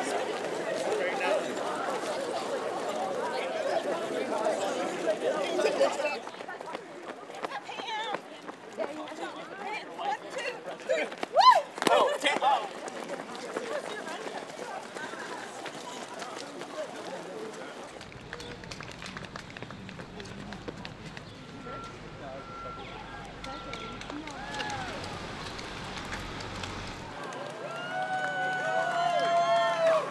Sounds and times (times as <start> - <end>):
Outside, urban or manmade: 0.0 - 30.1
Run: 0.0 - 30.1.